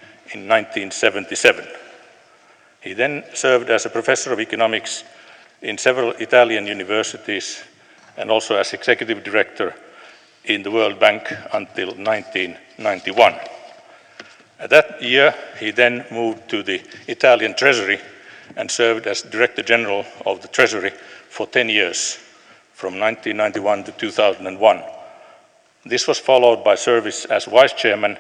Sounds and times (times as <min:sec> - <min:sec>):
Narration, monologue: 0:00.0 - 0:28.2
Male speech, man speaking: 0:00.3 - 0:01.9, 0:02.8 - 0:09.8, 0:10.5 - 0:13.6, 0:14.6 - 0:25.0, 0:25.9 - 0:28.2.